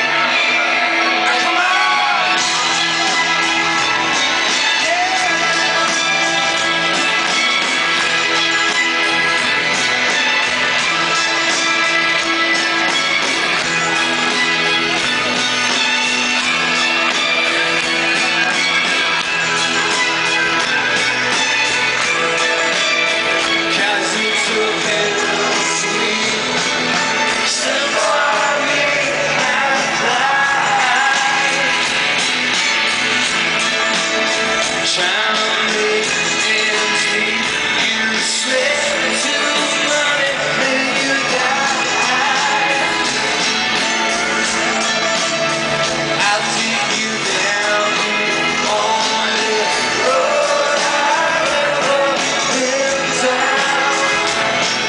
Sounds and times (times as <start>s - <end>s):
Music: 0.0s - 54.8s.